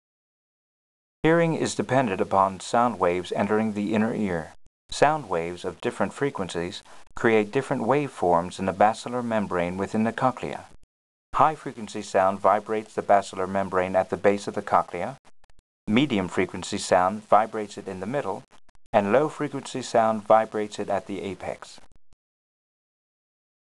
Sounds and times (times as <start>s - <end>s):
Speech: 1.2s - 10.8s, 11.4s - 15.2s, 15.9s - 21.9s.